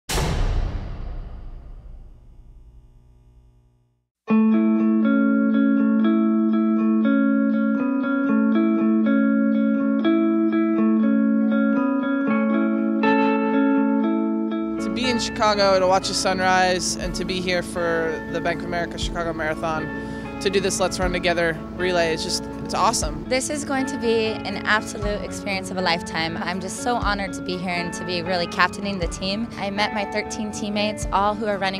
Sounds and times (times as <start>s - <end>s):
Music: 0.1s - 2.1s, 4.2s - 31.7s
Electronic tuner: 2.0s - 31.7s.